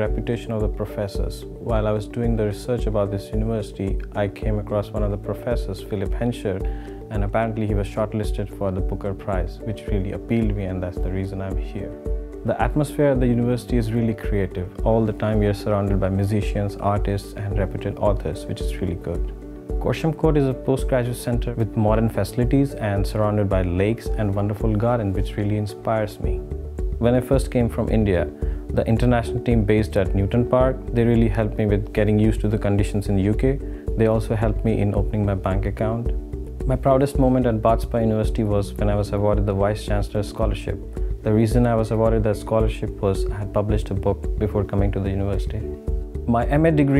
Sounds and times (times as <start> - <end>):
Music: 0.0 - 46.9
Speech: 0.0 - 46.9.